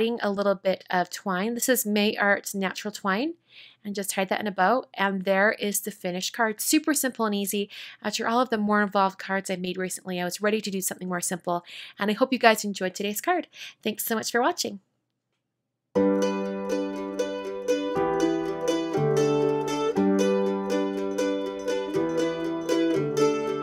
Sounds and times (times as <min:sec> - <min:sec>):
Mandolin: 0:16.0 - 0:23.6.